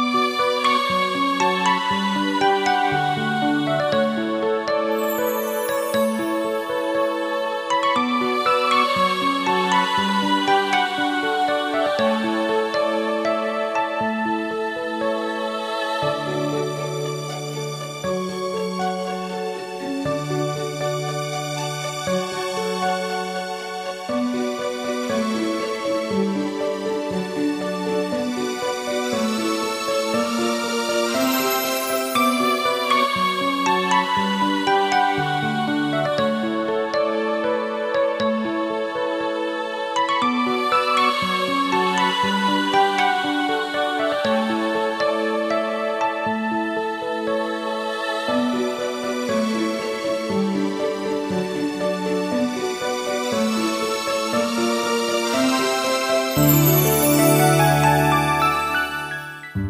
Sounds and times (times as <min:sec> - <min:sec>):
Music: 0:00.0 - 0:59.6.